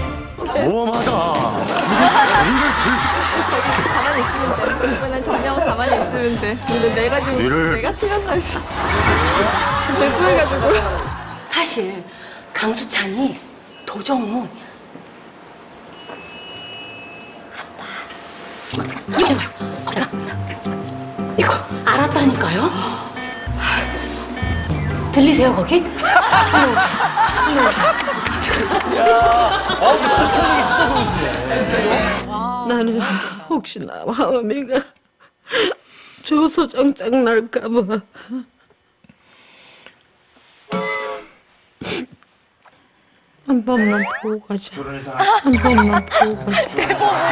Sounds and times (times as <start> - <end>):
Music: 0.0 - 0.6, 2.3 - 11.4, 18.7 - 32.6, 45.6 - 47.3
Inside, large room or hall: 26.0 - 32.6.